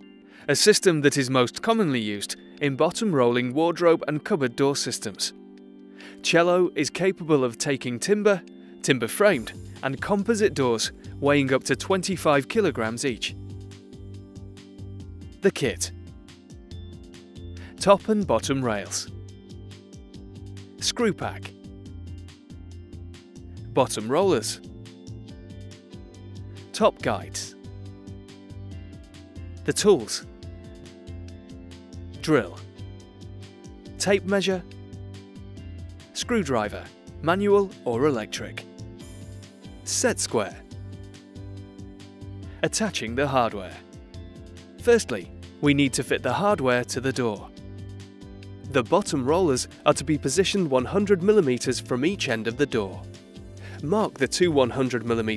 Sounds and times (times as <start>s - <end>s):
Music: 0.0s - 55.3s
Speech: 0.5s - 5.4s, 6.2s - 13.3s, 15.4s - 15.9s, 17.8s - 19.1s, 20.8s - 21.5s, 23.8s - 24.6s, 26.8s - 27.6s, 29.7s - 30.3s, 32.2s - 32.6s, 34.0s - 34.6s, 36.2s - 38.6s, 39.9s - 40.6s, 42.6s - 43.8s, 44.8s - 47.5s, 48.7s - 53.0s, 53.8s - 55.3s.